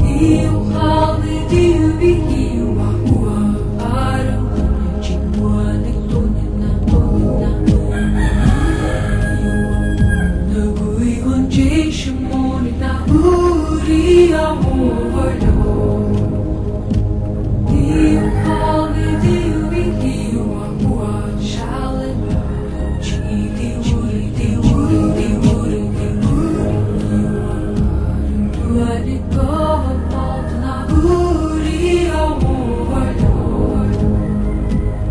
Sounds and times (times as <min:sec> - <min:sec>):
Music: 0:00.0 - 0:35.1.